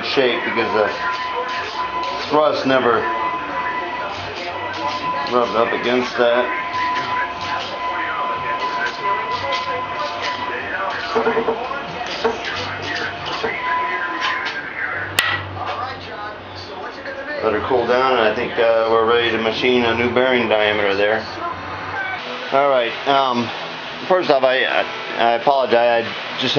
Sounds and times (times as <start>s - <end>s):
Speech: 0.0s - 26.5s.